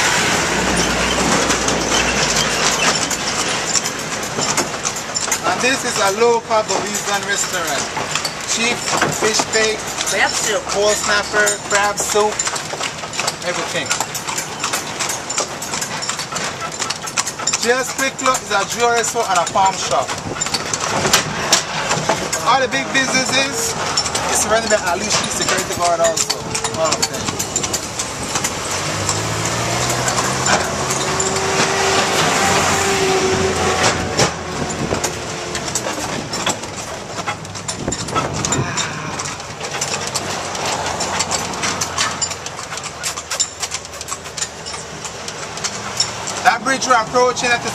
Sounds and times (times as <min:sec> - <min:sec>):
Clip-clop: 0:00.0 - 0:47.7
Speech: 0:05.4 - 0:07.9, 0:08.5 - 0:12.4, 0:13.4 - 0:13.9, 0:17.6 - 0:20.1, 0:22.4 - 0:27.4, 0:46.4 - 0:47.7.